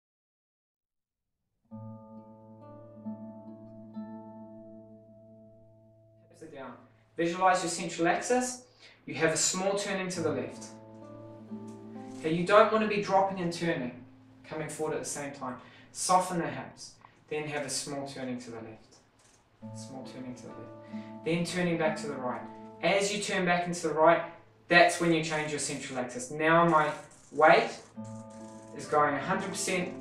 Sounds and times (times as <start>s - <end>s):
Music: 1.7s - 15.6s, 19.6s - 26.2s, 26.8s - 30.0s
Speech: 6.4s - 10.8s, 12.2s - 18.9s, 19.8s - 20.7s, 21.3s - 27.8s, 28.8s - 30.0s.